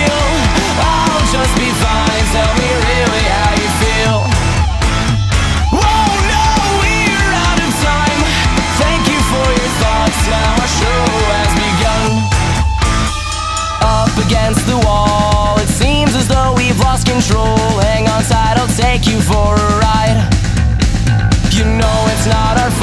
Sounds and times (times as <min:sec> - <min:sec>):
Grunge: 0:00.0 - 0:22.8
Heavy metal: 0:00.0 - 0:22.8
Progressive rock: 0:00.0 - 0:22.8
Punk rock: 0:00.0 - 0:22.8
Rock and roll: 0:00.0 - 0:22.8.